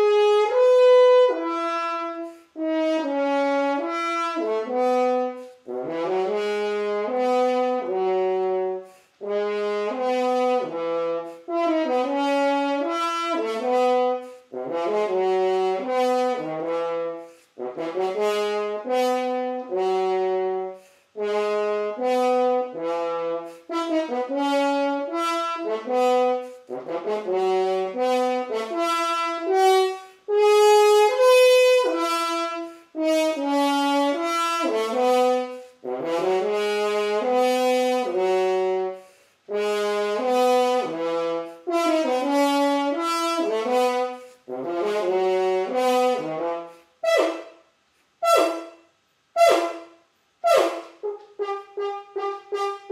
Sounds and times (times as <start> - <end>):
French horn: 0.0 - 52.9.